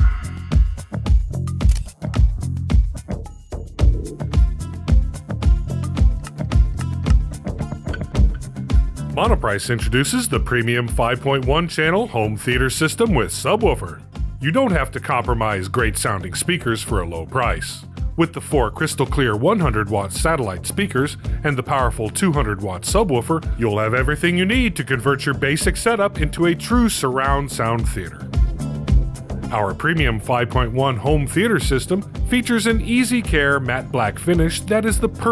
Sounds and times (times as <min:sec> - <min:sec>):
Music: 0:00.0 - 0:35.3
Speech: 0:09.2 - 0:28.2, 0:29.5 - 0:35.3.